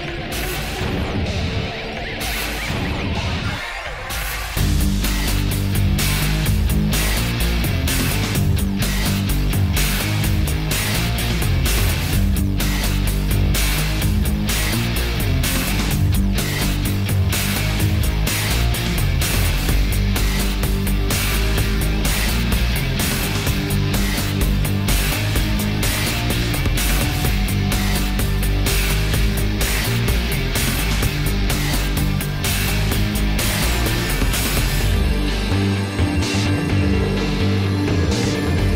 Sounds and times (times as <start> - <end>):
Music: 0.0 - 38.7.